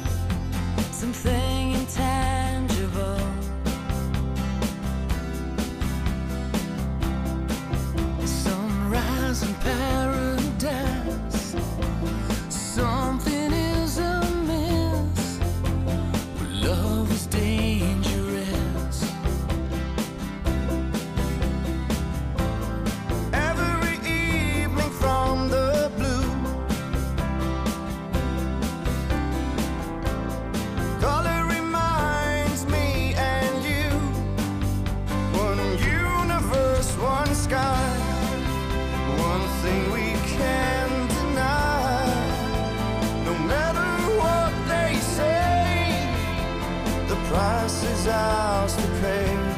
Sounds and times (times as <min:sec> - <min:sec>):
Music: 0:00.0 - 0:49.5.